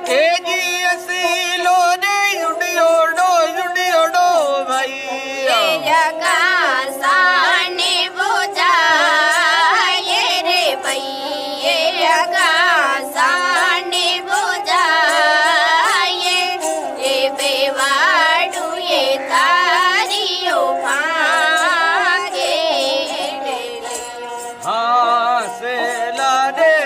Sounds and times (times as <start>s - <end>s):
Traditional music: 0.0s - 26.8s.